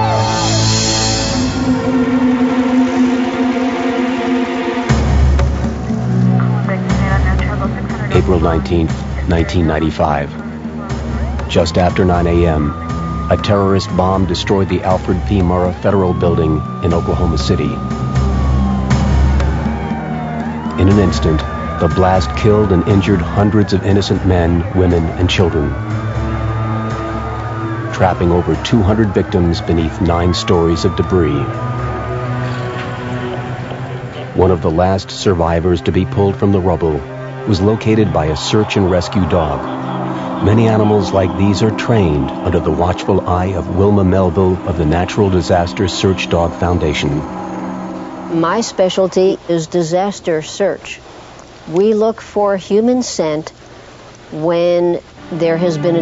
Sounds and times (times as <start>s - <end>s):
Music: 0.0s - 50.3s, 54.4s - 56.0s
Speech: 6.4s - 10.4s, 11.5s - 17.8s, 20.8s - 25.8s, 27.9s - 31.5s, 34.3s - 39.6s, 40.4s - 47.3s, 48.4s - 51.0s, 51.7s - 53.5s, 54.4s - 56.0s.